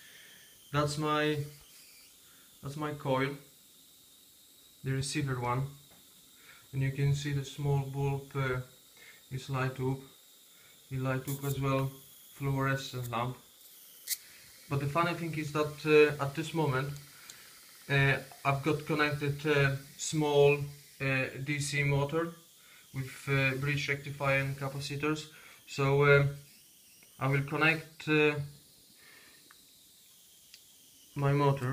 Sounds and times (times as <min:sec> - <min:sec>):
Inside, small room: 0:00.0 - 0:31.7
Speech: 0:00.8 - 0:01.5, 0:02.6 - 0:03.4, 0:04.8 - 0:05.7, 0:06.8 - 0:08.6, 0:09.3 - 0:10.0, 0:10.9 - 0:13.4, 0:14.7 - 0:17.0, 0:17.9 - 0:22.3, 0:23.0 - 0:26.4, 0:27.2 - 0:28.5, 0:31.2 - 0:31.7.